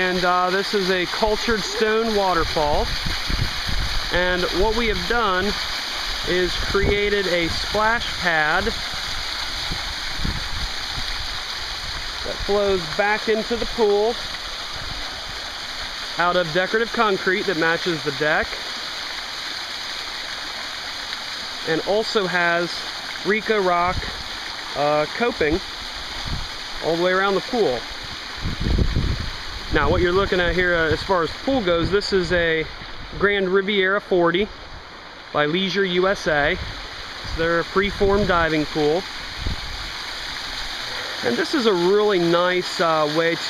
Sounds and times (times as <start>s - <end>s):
Speech: 0.0s - 2.9s, 4.1s - 5.6s, 6.3s - 8.8s, 12.3s - 14.2s, 16.2s - 18.5s, 21.7s - 24.1s, 24.8s - 25.6s, 26.8s - 27.8s, 29.7s - 34.5s, 35.4s - 36.6s, 37.3s - 39.0s, 41.2s - 43.4s
Stream: 0.0s - 43.4s.